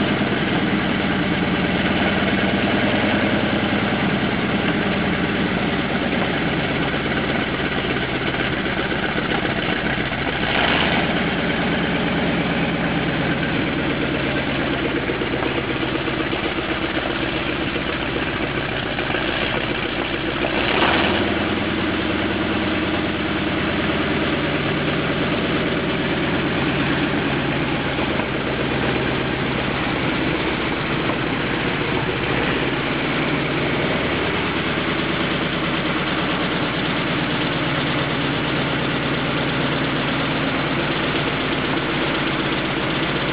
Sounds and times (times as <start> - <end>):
Heavy engine (low frequency): 0.0 - 43.3
Idling: 0.0 - 43.3.